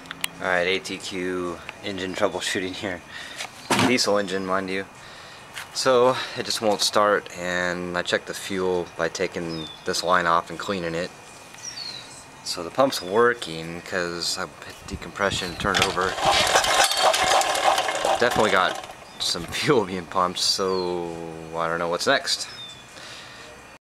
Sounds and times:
Speech: 0:00.4 - 0:03.0, 0:03.8 - 0:04.9, 0:05.8 - 0:11.1, 0:12.5 - 0:16.2, 0:18.1 - 0:22.5
Engine: 0:15.4 - 0:19.5.

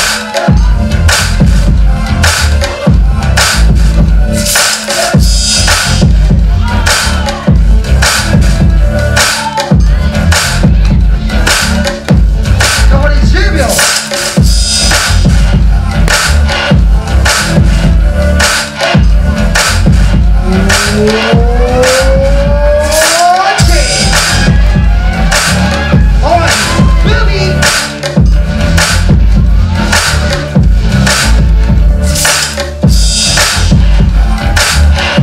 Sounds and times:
Hip hop music: 0:00.0 - 0:35.2.

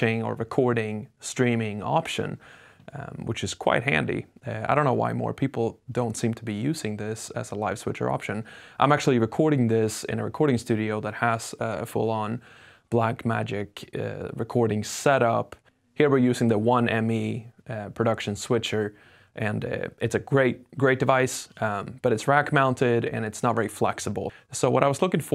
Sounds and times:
Speech: 0:00.0 - 0:25.3.

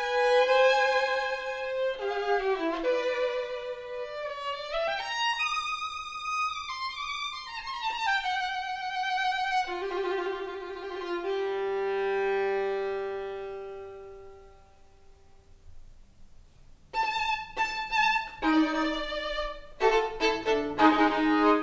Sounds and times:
Violin, fiddle: 0:00.0 - 0:14.8, 0:16.9 - 0:21.6.

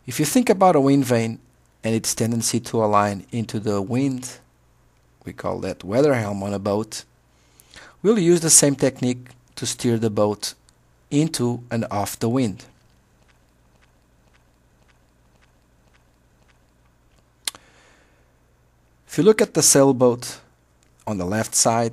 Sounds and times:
Speech: 0:00.1 - 0:04.5, 0:05.2 - 0:07.1, 0:08.0 - 0:12.8, 0:19.1 - 0:21.9.

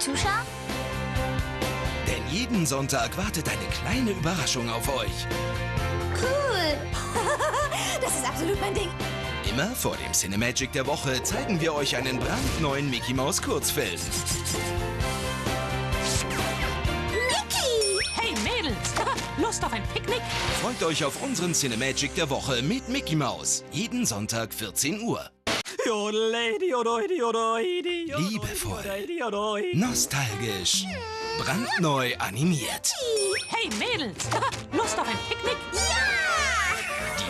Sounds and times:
Music: 0:00.0 - 0:37.3
Speech: 0:09.5 - 0:14.3, 0:19.4 - 0:25.3, 0:28.1 - 0:29.0, 0:29.8 - 0:36.5.

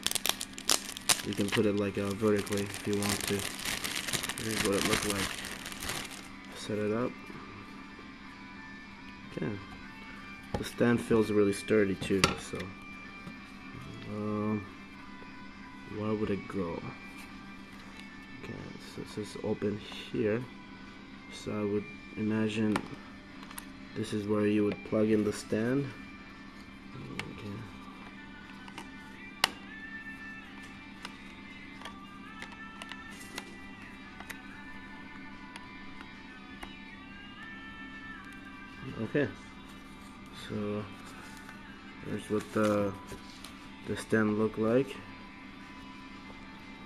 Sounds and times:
Music: 0:00.0 - 0:46.8.

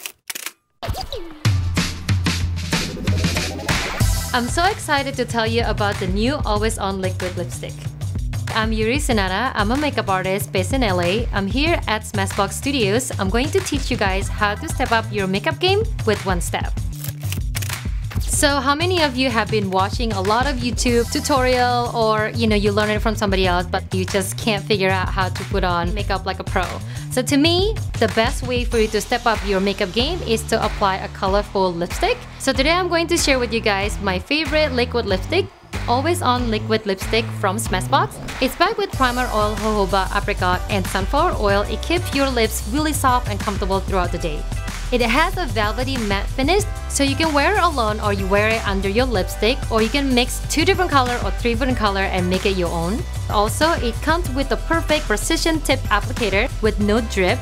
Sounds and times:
Music: 0:00.8 - 0:57.4
Speech: 0:04.3 - 0:07.9, 0:08.5 - 0:16.8, 0:18.2 - 0:57.4.

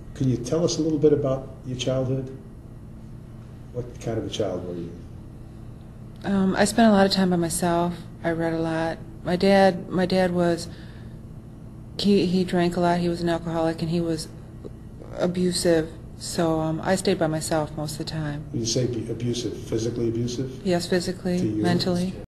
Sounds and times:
Speech: 0:00.2 - 0:02.4, 0:03.8 - 0:05.0, 0:06.2 - 0:10.7, 0:12.0 - 0:14.3, 0:15.0 - 0:22.2.

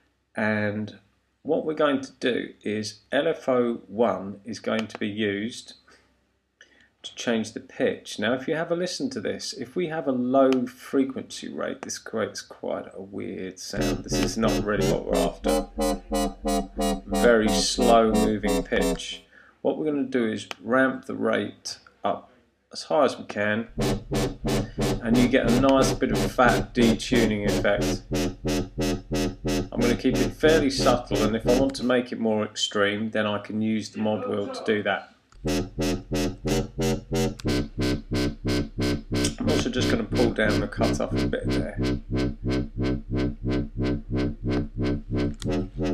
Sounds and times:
Speech: 0:00.4 - 0:05.8, 0:07.0 - 0:15.6, 0:17.1 - 0:23.7, 0:25.0 - 0:28.0, 0:29.8 - 0:35.1, 0:39.3 - 0:41.8
Synthesizer: 0:13.8 - 0:19.1, 0:23.8 - 0:31.8, 0:44.8 - 0:45.9
Electronic music: 0:13.8 - 0:19.2, 0:23.7 - 0:31.9, 0:35.4 - 0:45.9.

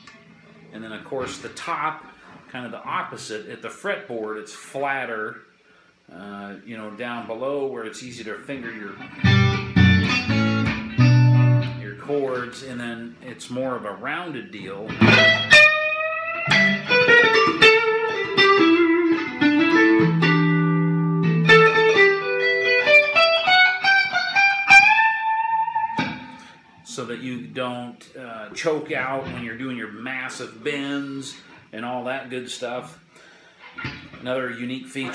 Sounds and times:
Speech: 0:00.7 - 0:05.5, 0:06.1 - 0:09.1, 0:11.8 - 0:15.0, 0:26.9 - 0:33.0, 0:34.2 - 0:35.1
Tapping (guitar technique): 0:09.0 - 0:11.8, 0:14.9 - 0:26.5
Electric guitar: 0:09.0 - 0:11.9, 0:14.9 - 0:26.8.

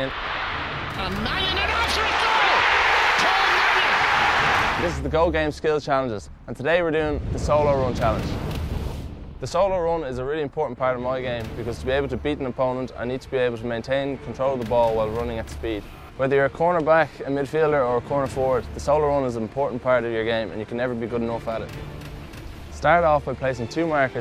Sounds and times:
Music: 0:00.0 - 0:24.2
Speech: 0:04.8 - 0:08.4, 0:09.4 - 0:21.7, 0:22.8 - 0:24.2.

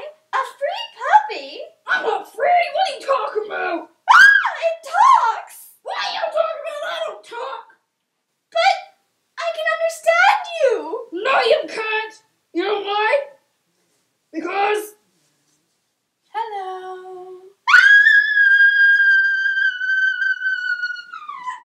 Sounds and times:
Speech: 0:00.0 - 0:07.8, 0:08.5 - 0:13.4, 0:14.3 - 0:15.0, 0:16.3 - 0:17.6
Inside, small room: 0:00.0 - 0:21.6.

